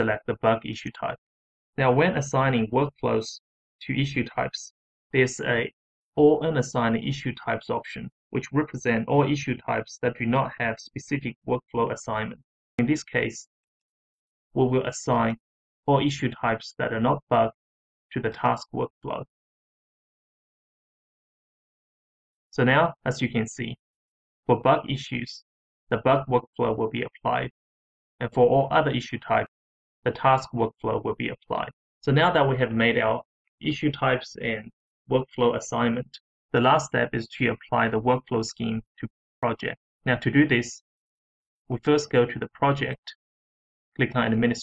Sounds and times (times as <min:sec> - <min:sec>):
Speech synthesizer: 0:00.0 - 0:01.2, 0:01.8 - 0:13.5, 0:14.6 - 0:17.6, 0:18.2 - 0:19.3, 0:22.6 - 0:23.8, 0:24.5 - 0:27.5, 0:28.2 - 0:29.5, 0:30.1 - 0:40.8, 0:41.7 - 0:43.2, 0:44.0 - 0:44.6.